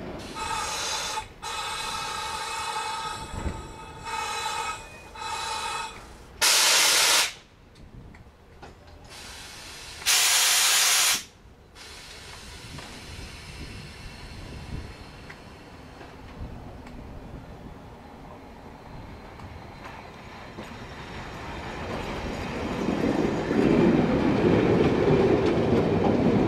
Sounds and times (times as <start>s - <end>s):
Railroad car, train wagon: 0.0s - 26.4s
Train: 0.0s - 26.4s.